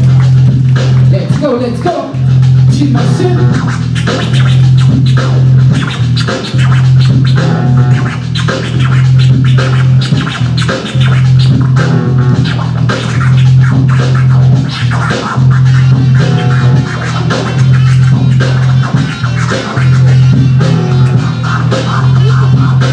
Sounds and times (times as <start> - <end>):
Electronic music: 0.0 - 22.9
Scratching (performance technique): 0.0 - 22.9.